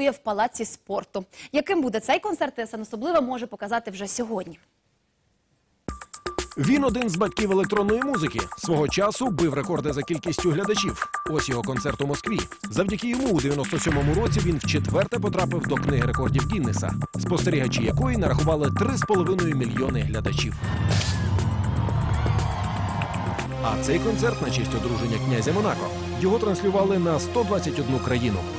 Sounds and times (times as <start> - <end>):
Speech: 0.0 - 4.6, 6.6 - 20.6, 23.6 - 28.5
Electronic music: 5.9 - 27.5.